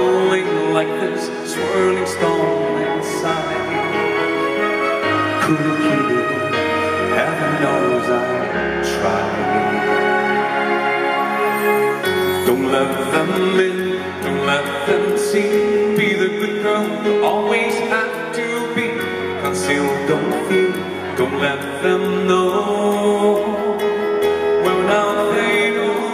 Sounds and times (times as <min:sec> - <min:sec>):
Male singing: 0:00.0 - 0:04.4, 0:05.2 - 0:10.4, 0:12.1 - 0:26.1
Music: 0:00.0 - 0:26.1.